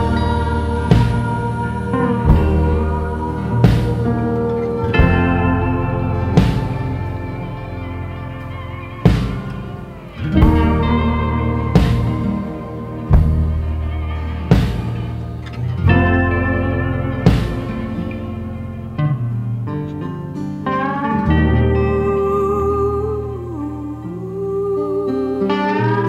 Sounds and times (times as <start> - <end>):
Steel guitar, slide guitar: 0.0 - 26.0.